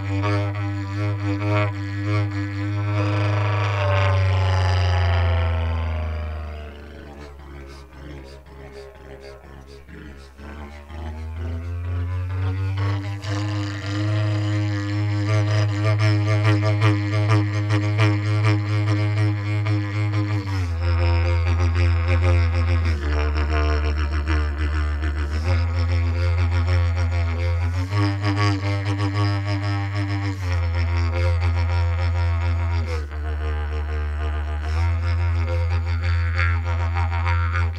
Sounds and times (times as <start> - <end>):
Didgeridoo: 0.0 - 37.7.